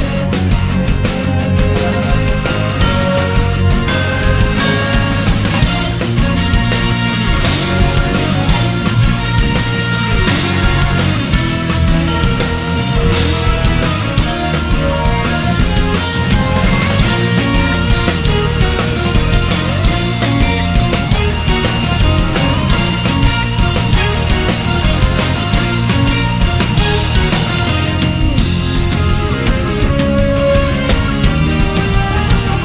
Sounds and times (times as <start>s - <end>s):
Video game music: 0.0s - 32.6s.